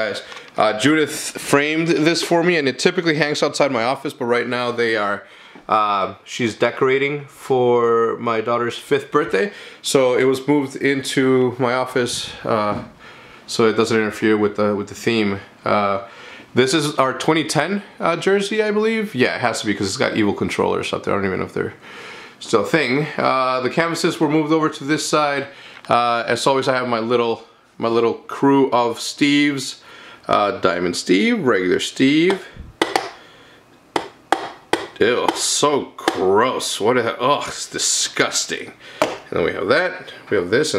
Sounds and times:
Speech: 0.0s - 21.8s, 22.4s - 32.6s, 35.0s - 40.7s.

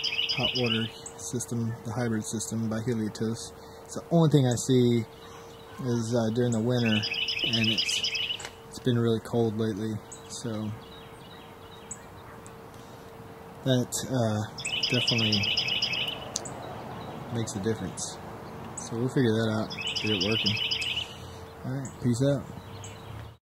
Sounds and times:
Bird vocalization, bird call, bird song: 0.0s - 3.6s, 4.5s - 13.5s, 14.4s - 23.4s
Outside, rural or natural: 0.0s - 23.4s
Speech: 0.4s - 5.1s, 5.8s - 8.0s, 8.8s - 10.8s, 13.7s - 15.5s, 17.3s - 18.2s, 18.8s - 20.6s, 21.6s - 22.5s.

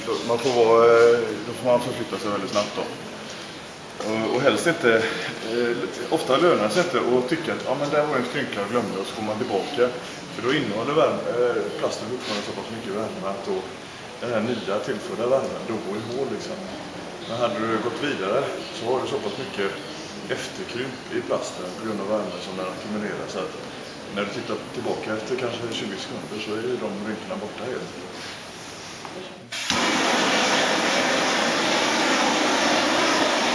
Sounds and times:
Speech: 0.0s - 3.0s, 4.0s - 28.2s.

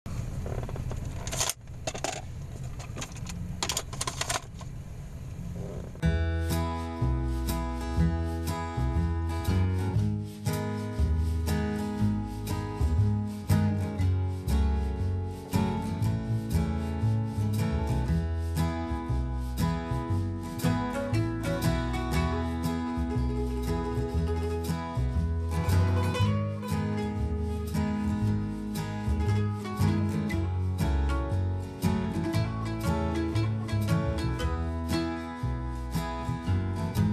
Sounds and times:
Music: 6.0s - 37.1s.

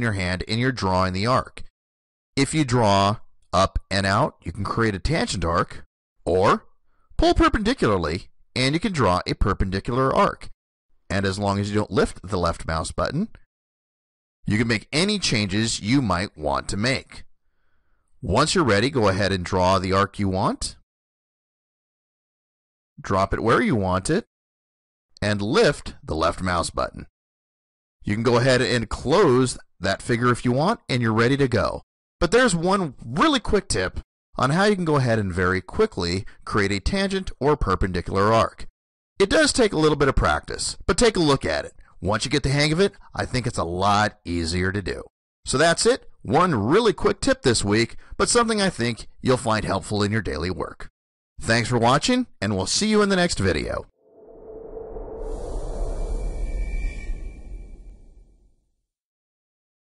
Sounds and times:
Speech: 0.0s - 1.7s, 2.4s - 13.4s, 14.5s - 17.3s, 18.2s - 20.8s, 23.0s - 24.3s, 25.2s - 27.1s, 28.1s - 53.9s.

